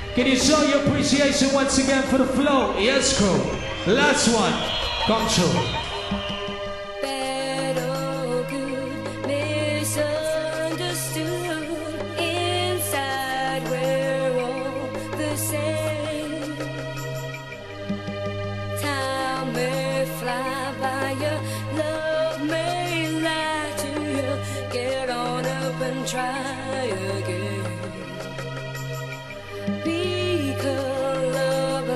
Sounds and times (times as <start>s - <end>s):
Music: 0.0s - 31.9s.